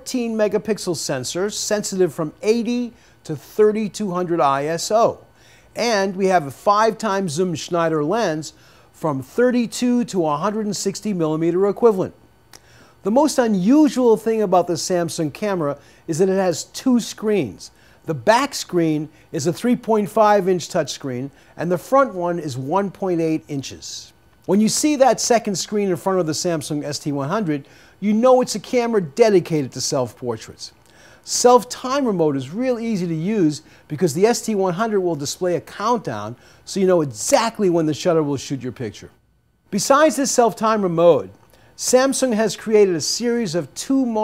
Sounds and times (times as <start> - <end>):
Speech: 0.0 - 12.2, 13.0 - 44.2.